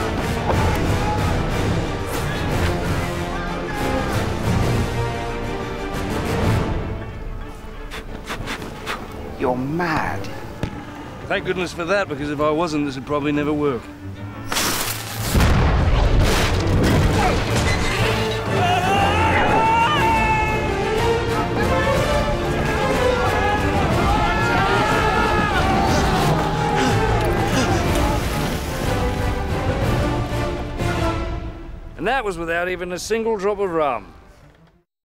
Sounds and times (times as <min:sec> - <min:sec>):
Music: 0:00.0 - 0:34.9
Speech: 0:32.0 - 0:34.1.